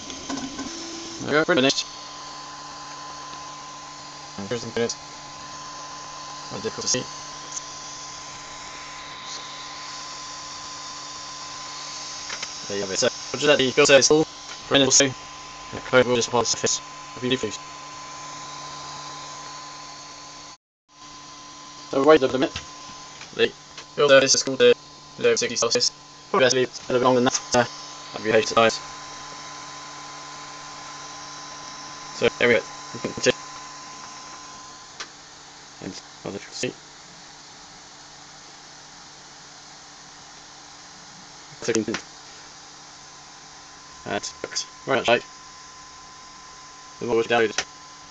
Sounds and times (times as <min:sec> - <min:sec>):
Printer: 0:00.0 - 0:25.8, 0:26.4 - 0:35.2
Speech: 0:01.2 - 0:01.9, 0:04.4 - 0:05.0, 0:06.5 - 0:07.1, 0:12.7 - 0:15.2, 0:15.8 - 0:17.6, 0:21.9 - 0:22.6, 0:23.4 - 0:28.8, 0:32.2 - 0:33.4, 0:35.8 - 0:36.8, 0:41.6 - 0:42.0, 0:44.0 - 0:45.3, 0:47.0 - 0:47.6.